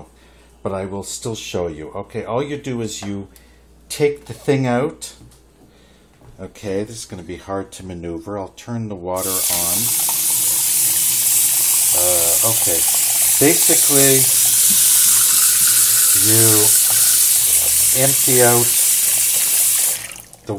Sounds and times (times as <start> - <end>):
Speech: 0.0 - 3.3, 3.9 - 5.3, 6.3 - 9.9, 11.9 - 14.3, 16.2 - 16.8, 17.9 - 18.8.